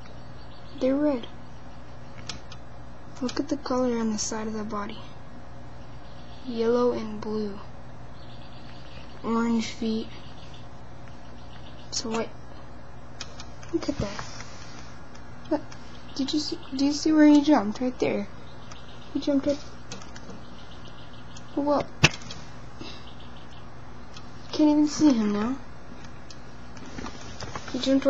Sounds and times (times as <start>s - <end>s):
Speech: 0.8s - 1.4s, 3.2s - 5.2s, 6.4s - 7.7s, 9.2s - 10.2s, 11.9s - 12.4s, 13.7s - 14.2s, 15.5s - 18.4s, 19.1s - 19.6s, 21.6s - 21.9s, 24.5s - 25.7s, 27.7s - 28.1s.